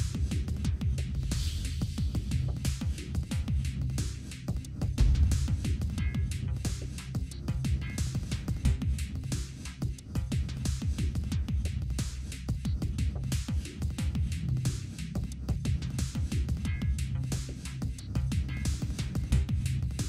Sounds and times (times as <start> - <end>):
Music: 0.0 - 20.0.